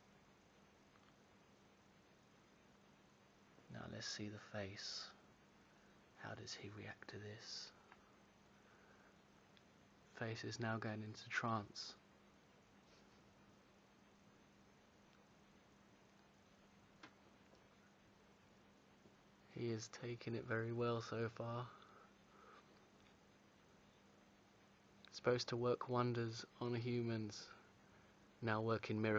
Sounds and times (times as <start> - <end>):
Speech: 3.7 - 5.2, 6.2 - 7.8, 10.2 - 12.0, 19.5 - 21.8, 25.1 - 27.6, 28.4 - 29.1.